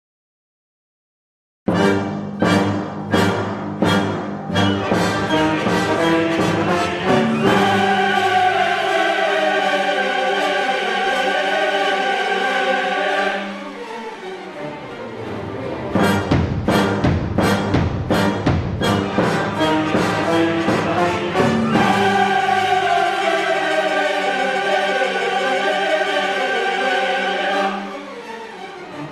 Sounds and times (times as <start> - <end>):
Timpani: 1.7 - 14.1, 14.8 - 28.2
Orchestra: 1.7 - 29.1
Choir: 4.9 - 16.2, 19.5 - 29.1
Drum kit: 16.0 - 22.4.